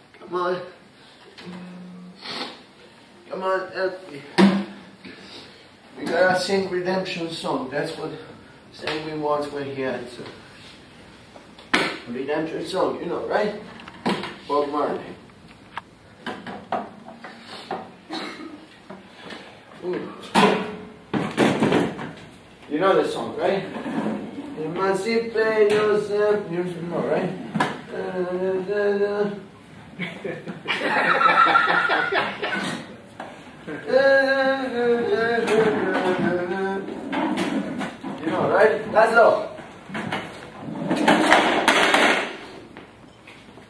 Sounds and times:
Speech: 6.0s - 10.4s, 12.1s - 13.7s, 14.5s - 15.2s, 19.8s - 20.3s, 22.7s - 23.8s, 24.6s - 29.4s, 38.2s - 39.6s.

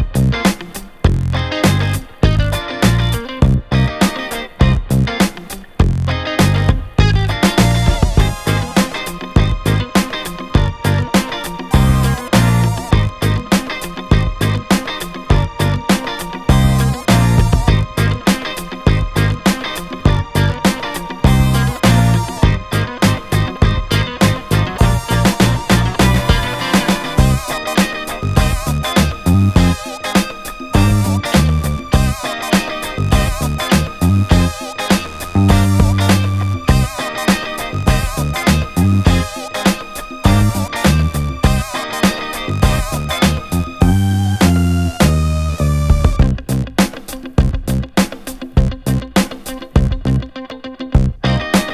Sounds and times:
Music: 0.0s - 51.7s.

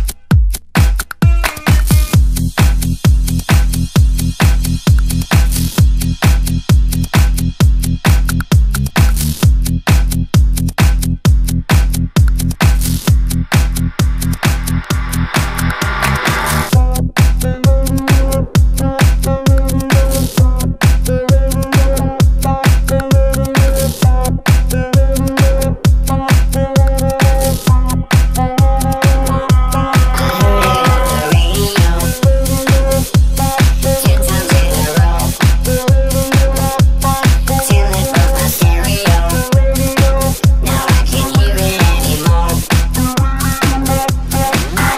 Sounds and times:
Music: 0.0s - 44.9s.

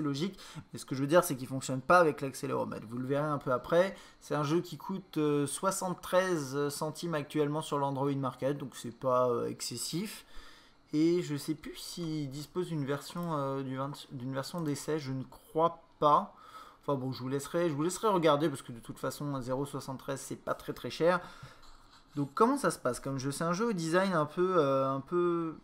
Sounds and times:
Speech: 0.0s - 10.3s, 10.9s - 21.2s, 22.1s - 25.6s.

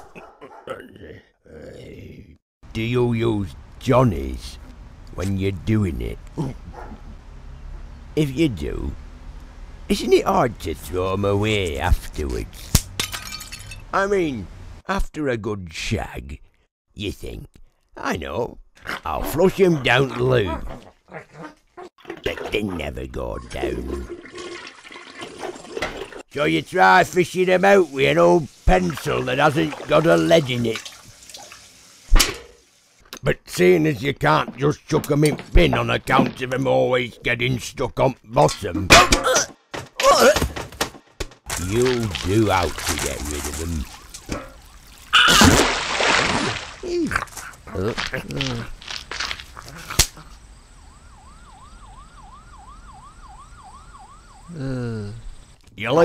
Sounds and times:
Water: 22.0s - 26.3s, 27.8s - 33.0s, 41.8s - 47.2s
Toilet flush: 24.0s - 26.2s, 29.0s - 32.1s.

